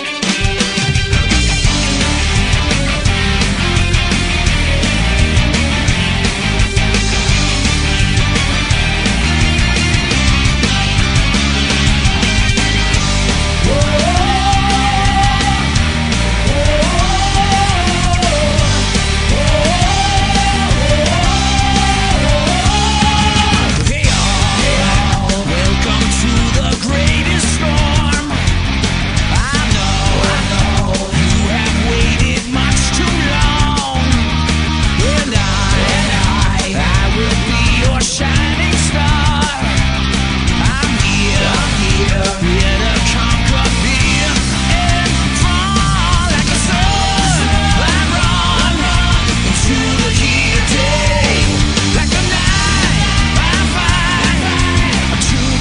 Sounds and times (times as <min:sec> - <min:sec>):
Music: 0:00.0 - 0:55.6.